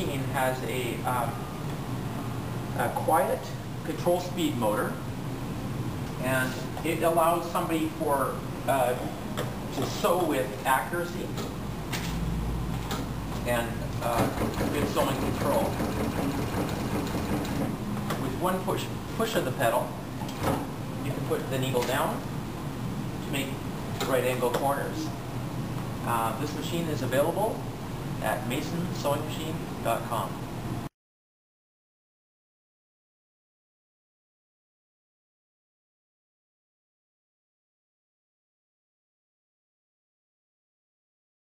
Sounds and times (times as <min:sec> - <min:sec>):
Speech: 0:00.0 - 0:01.4, 0:02.8 - 0:05.0, 0:06.2 - 0:11.5, 0:13.4 - 0:15.8, 0:18.2 - 0:20.0, 0:21.0 - 0:22.3, 0:23.2 - 0:25.2, 0:26.0 - 0:27.6, 0:28.2 - 0:30.4.